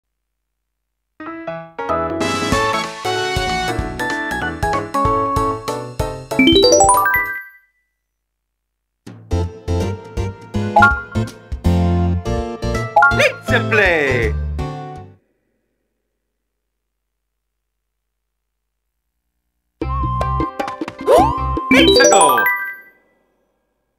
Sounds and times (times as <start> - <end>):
Jingle, tinkle: 6.4 - 7.9, 21.7 - 23.0.